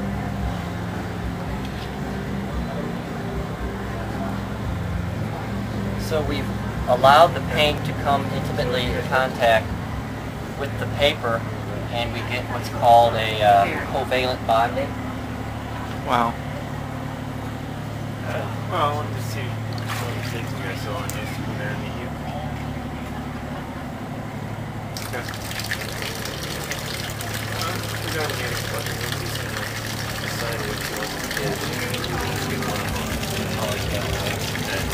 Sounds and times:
Speech: 0:06.0 - 0:09.7, 0:10.6 - 0:15.0, 0:18.2 - 0:23.9, 0:26.4 - 0:34.9
Fill (with liquid): 0:19.7 - 0:21.3, 0:25.0 - 0:34.9.

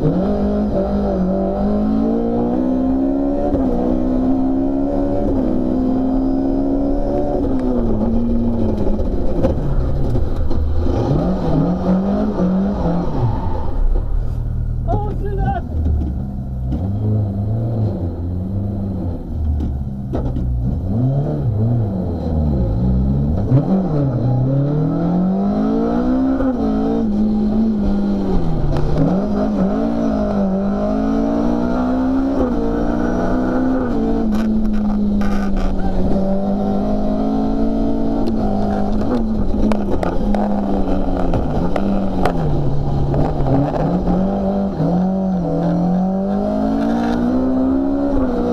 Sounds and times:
Car: 0:00.0 - 0:48.5
Speech: 0:14.8 - 0:15.7.

